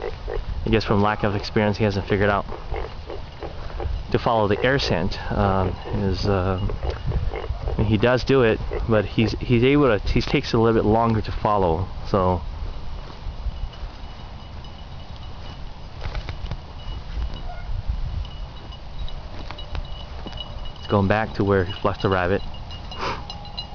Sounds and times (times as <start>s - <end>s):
Speech: 0.7s - 2.4s, 4.1s - 6.7s, 7.8s - 12.4s, 20.8s - 22.4s.